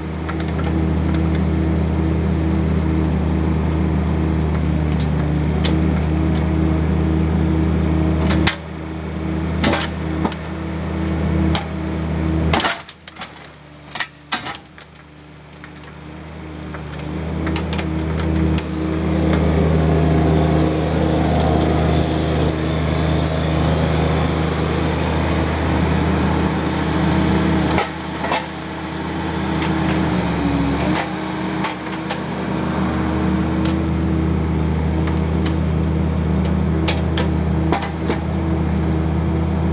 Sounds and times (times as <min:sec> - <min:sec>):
Vehicle: 0:00.0 - 0:39.7.